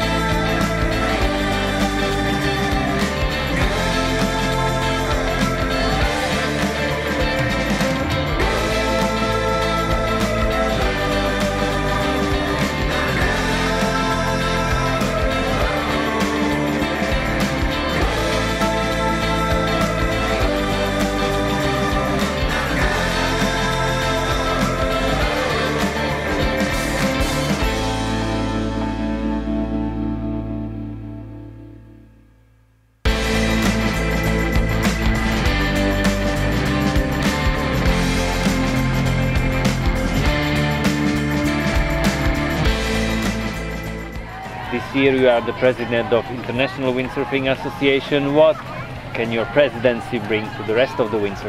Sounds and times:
Electronic music: 0.0 - 32.2, 33.1 - 51.4.

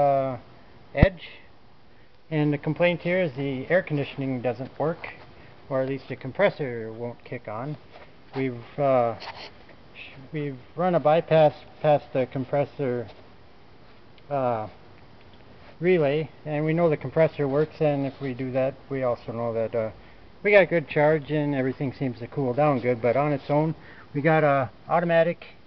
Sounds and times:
Speech: 0.0 - 1.5, 2.3 - 7.8, 8.4 - 9.4, 10.0 - 13.2, 14.3 - 14.8, 15.8 - 25.6.

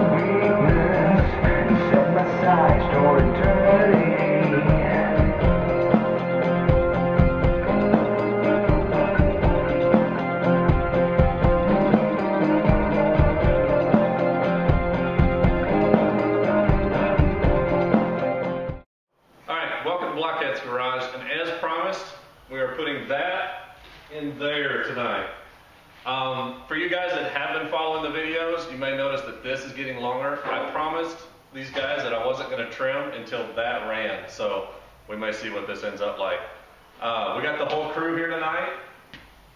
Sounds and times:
Music: 0.0 - 18.9.

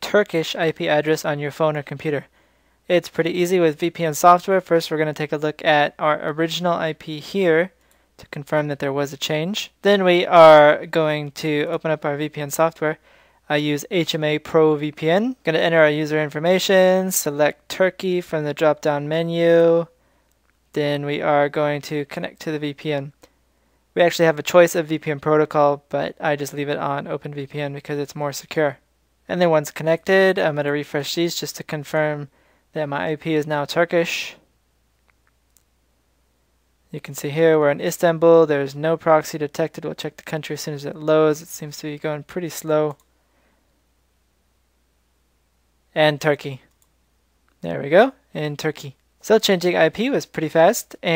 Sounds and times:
Speech: 0.0 - 2.3, 2.9 - 20.0, 20.7 - 23.3, 24.0 - 34.4, 36.9 - 43.0, 45.9 - 46.7, 47.6 - 51.1.

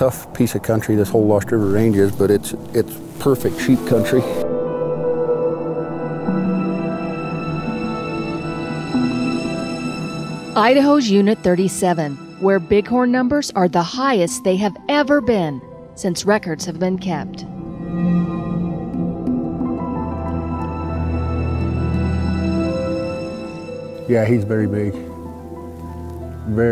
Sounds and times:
Music: 1.6 - 26.7.

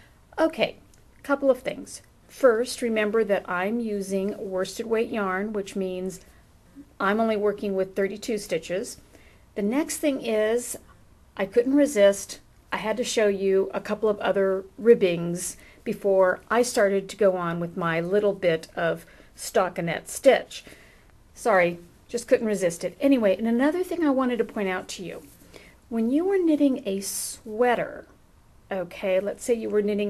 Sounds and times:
Speech: 0.4 - 9.0, 9.6 - 10.8, 11.4 - 20.6, 21.4 - 25.3, 25.9 - 30.1.

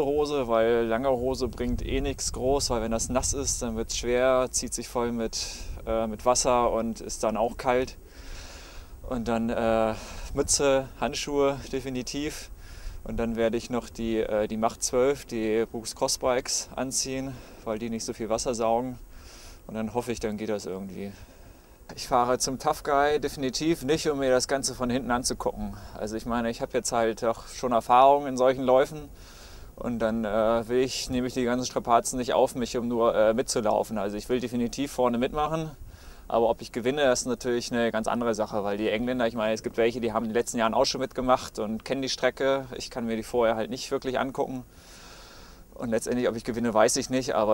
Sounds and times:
Speech: 0.0 - 8.0, 9.0 - 19.0, 19.7 - 21.2, 21.9 - 29.1, 29.8 - 44.7, 45.8 - 47.5.

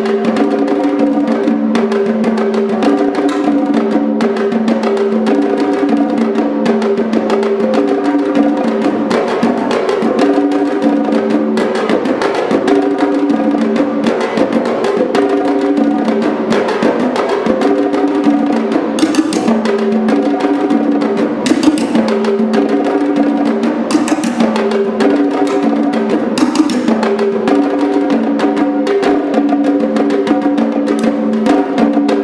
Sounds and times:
Percussion: 0.0 - 32.2.

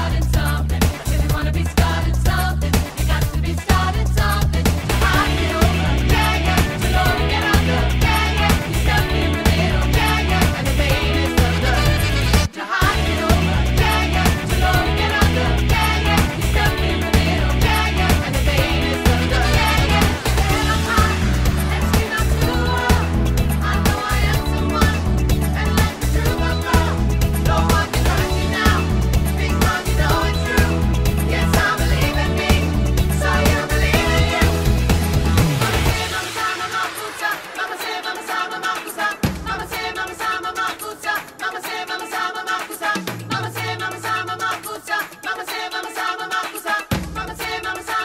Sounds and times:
Pop music: 0.0 - 48.0.

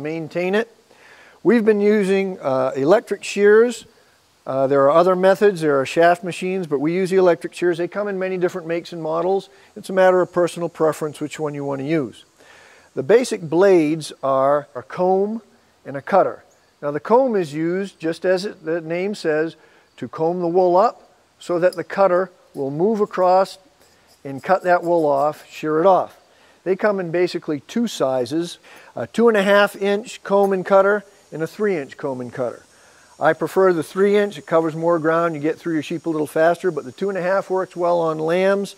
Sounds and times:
Speech: 0.0 - 0.8, 1.4 - 3.9, 4.5 - 12.3, 13.0 - 23.6, 24.2 - 38.7.

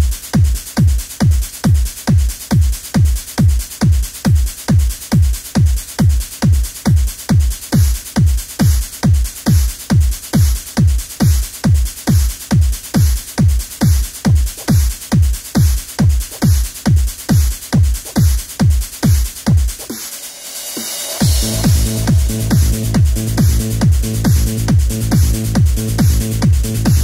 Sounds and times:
Techno: 0.0 - 27.0
Trance music: 19.0 - 27.0.

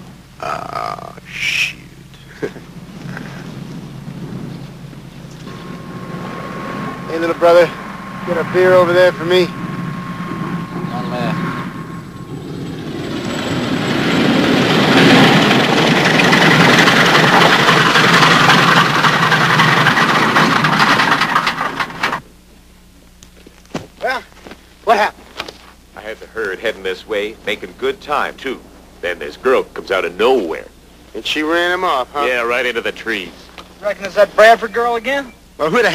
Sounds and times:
Speech: 0.4 - 1.9, 7.1 - 9.5, 10.8 - 11.4, 24.0 - 24.3, 24.9 - 25.2, 26.0 - 35.9.

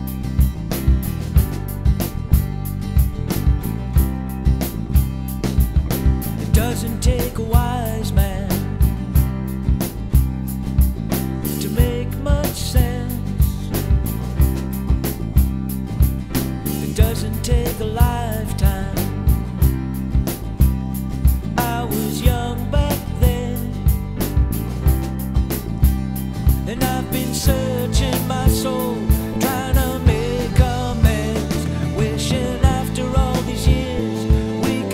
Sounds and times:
Music: 0.0 - 34.9.

